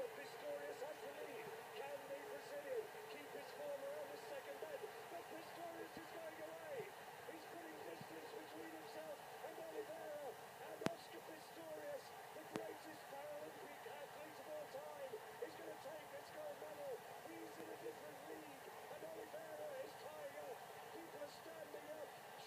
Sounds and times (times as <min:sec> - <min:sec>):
Speech: 0:00.0 - 0:22.4.